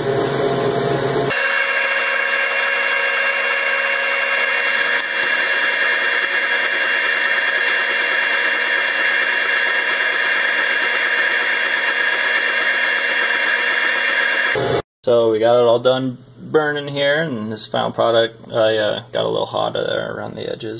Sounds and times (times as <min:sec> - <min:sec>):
Speech: 0:15.0 - 0:20.7.